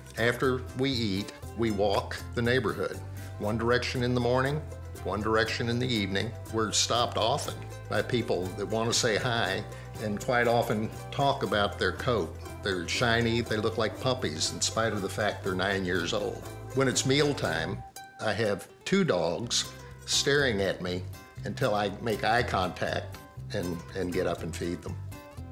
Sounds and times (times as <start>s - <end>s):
Music: 0.0s - 25.5s
Speech: 0.2s - 25.0s.